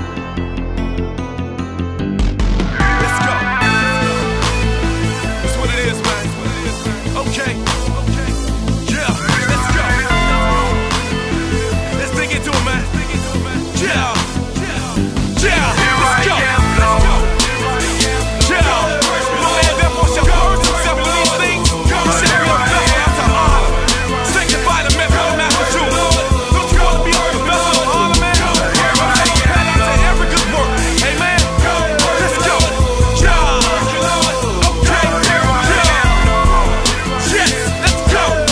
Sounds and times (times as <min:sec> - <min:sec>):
Music: 0:00.0 - 0:38.5
Singing: 0:12.0 - 0:38.5.